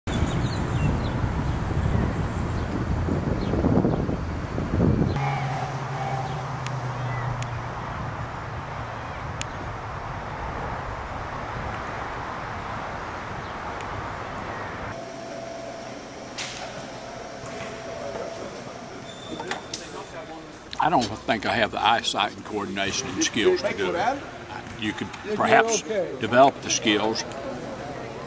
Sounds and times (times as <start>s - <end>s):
Wind noise (microphone): 0.1s - 5.2s.